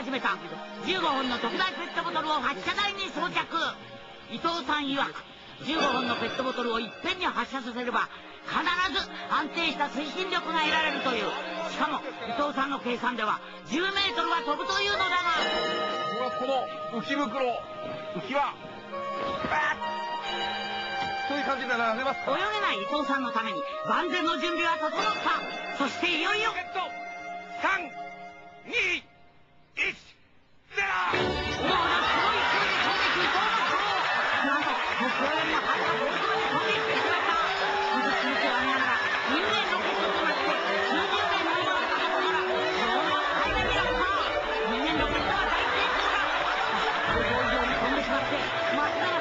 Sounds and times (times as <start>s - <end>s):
Music: 0.0s - 29.8s, 31.0s - 49.2s.